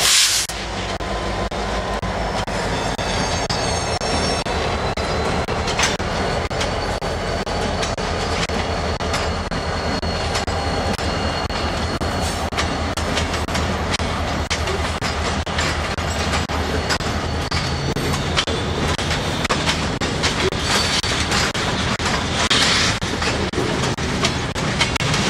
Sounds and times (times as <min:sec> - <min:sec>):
Railroad car, train wagon: 0:00.0 - 0:25.2
Train: 0:00.0 - 0:25.2.